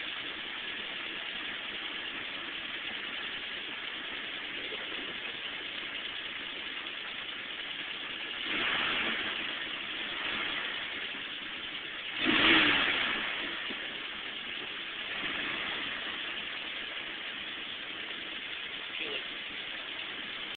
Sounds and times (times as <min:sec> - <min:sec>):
Speech: 0:18.9 - 0:19.3.